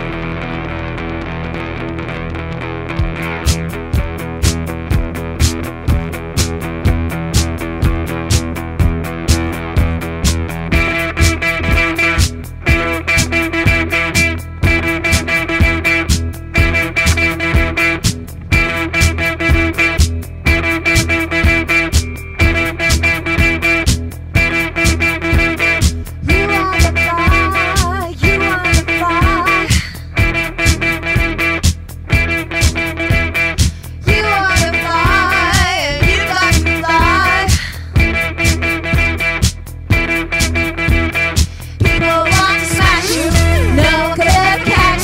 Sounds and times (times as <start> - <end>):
Music: 0.0 - 45.0.